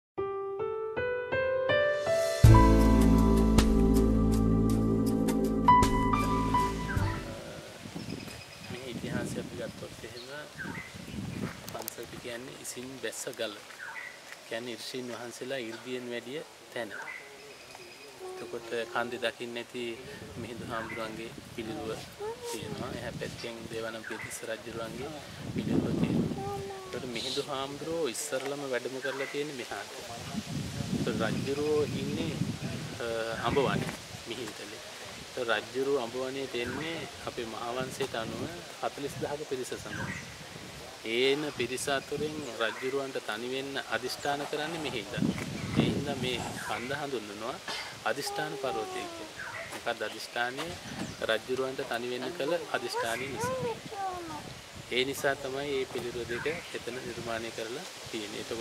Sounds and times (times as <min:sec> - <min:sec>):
Music: 0:00.2 - 0:07.4
Outside, rural or natural: 0:00.2 - 0:58.6.